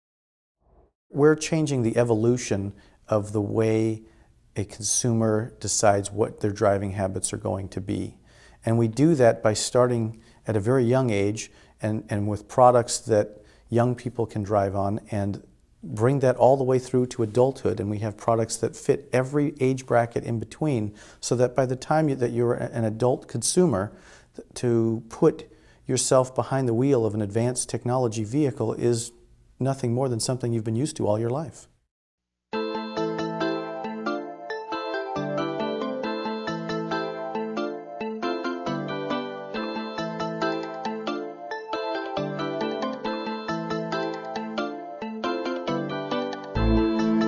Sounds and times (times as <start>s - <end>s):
Speech: 1.2s - 4.0s, 4.6s - 31.7s
Music: 32.6s - 47.2s.